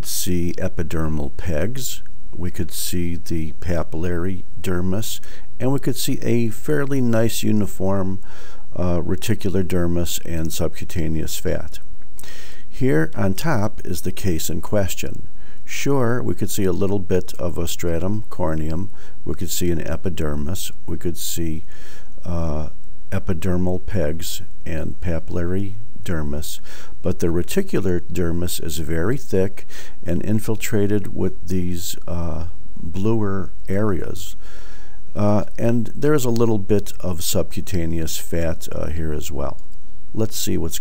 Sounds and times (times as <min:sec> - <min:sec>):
Speech: 0:00.0 - 0:11.9, 0:12.7 - 0:34.4, 0:35.2 - 0:39.6, 0:40.2 - 0:40.8.